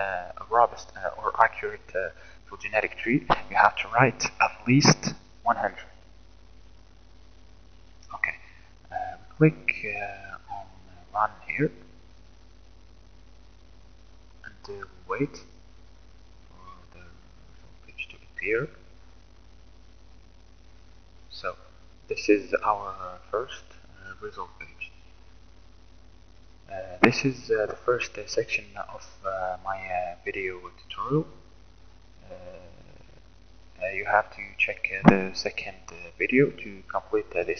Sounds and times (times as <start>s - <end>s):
Speech: 0.0s - 5.9s, 8.1s - 11.8s, 14.5s - 15.4s, 16.6s - 17.2s, 17.9s - 18.8s, 21.3s - 24.9s, 26.7s - 31.3s, 32.2s - 33.0s, 33.8s - 37.5s.